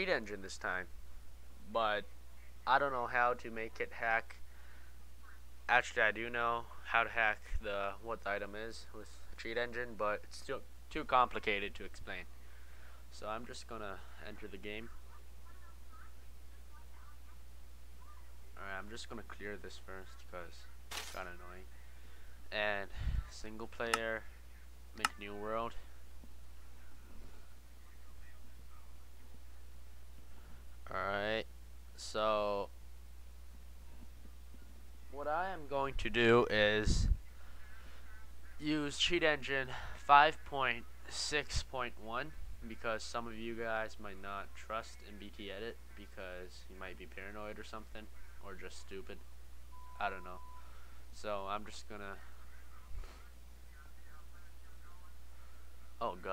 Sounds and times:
Speech: 2.7 - 4.4, 13.2 - 21.7, 22.5 - 24.3, 25.0 - 25.9, 38.6 - 49.2, 51.2 - 55.2, 56.0 - 56.3.

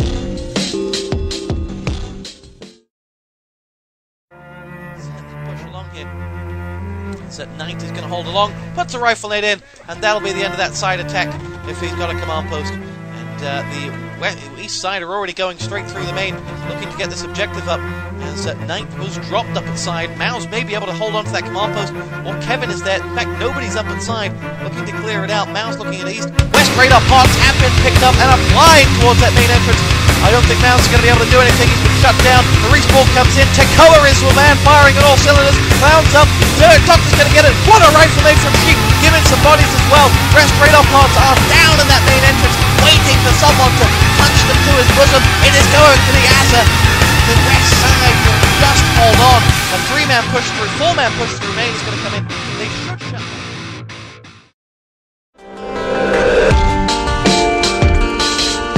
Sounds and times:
Music: 0.0 - 2.9, 4.3 - 54.6, 55.4 - 58.7
Speech: 5.0 - 6.1, 7.3 - 53.3.

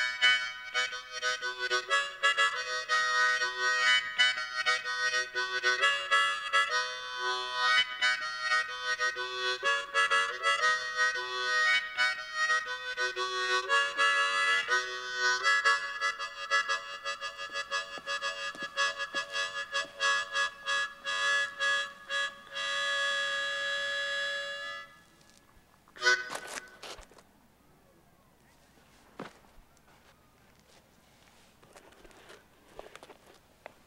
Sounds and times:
Music: 0.0 - 25.0
Outside, rural or natural: 0.0 - 33.8.

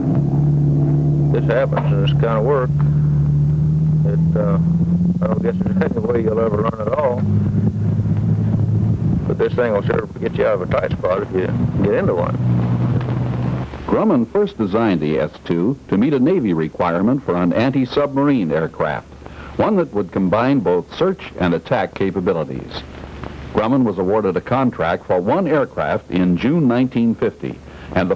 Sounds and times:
Vehicle: 0.0 - 28.1
Speech: 1.4 - 2.8, 4.1 - 7.2, 9.3 - 12.4, 13.9 - 22.9, 23.6 - 28.1.

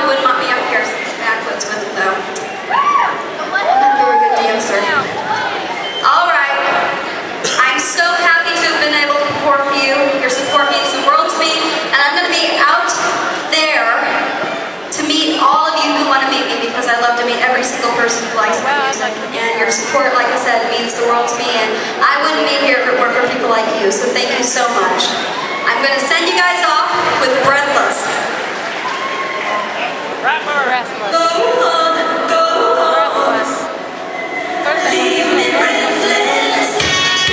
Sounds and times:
Speech: 3.4 - 28.3, 32.4 - 33.8.

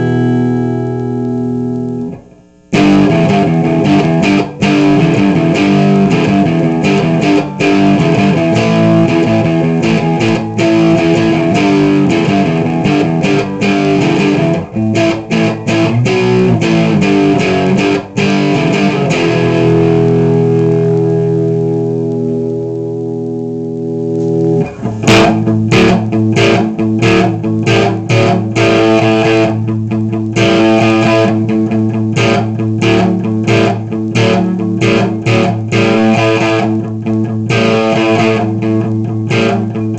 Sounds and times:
Music: 0.0 - 39.9.

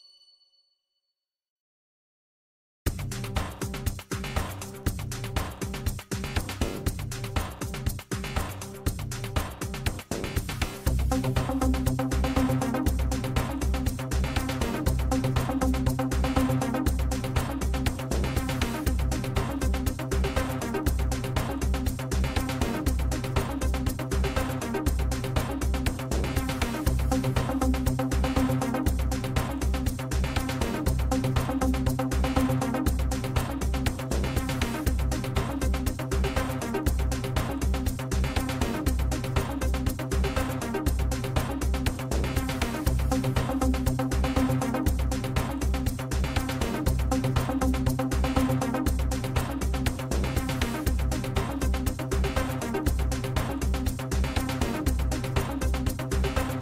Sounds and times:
Music: 2.9 - 56.6.

